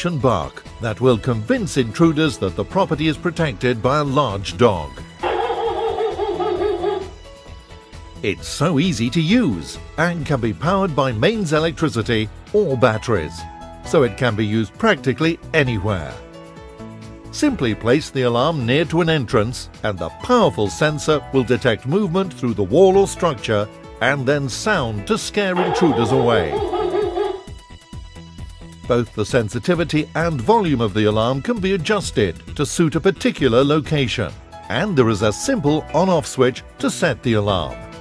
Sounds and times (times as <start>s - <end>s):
Speech: 0.0s - 5.0s, 8.2s - 16.2s, 17.3s - 26.7s, 28.9s - 37.8s
Music: 0.0s - 38.0s.